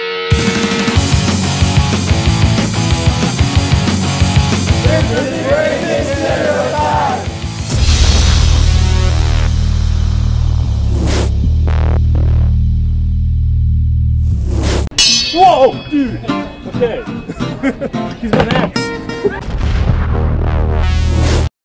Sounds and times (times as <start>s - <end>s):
Music: 0.0s - 21.5s
Speech: 4.8s - 7.2s, 15.4s - 17.2s.